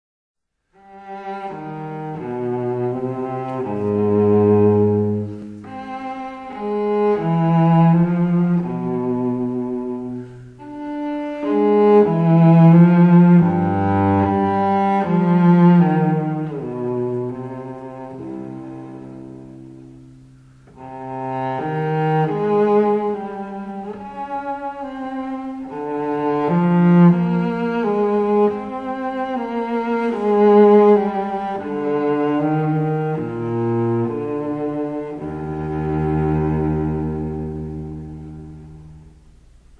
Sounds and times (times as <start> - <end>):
Cello: 0.6 - 39.7
Double bass: 0.7 - 39.7.